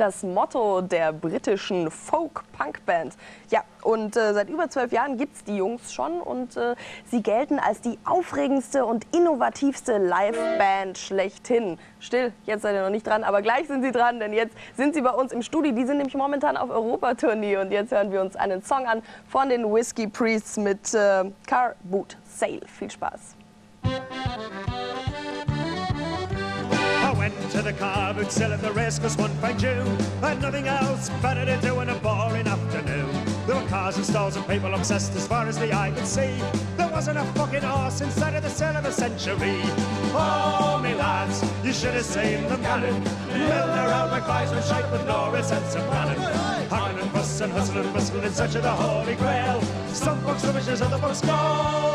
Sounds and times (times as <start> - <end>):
Music: 10.2 - 11.1, 23.5 - 51.9.